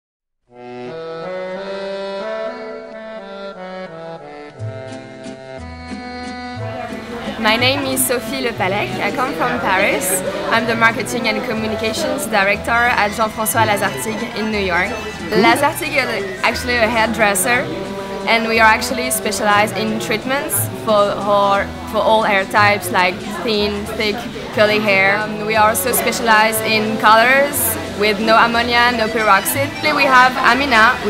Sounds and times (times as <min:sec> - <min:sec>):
Wind instrument, woodwind instrument: 0:00.5 - 0:31.0.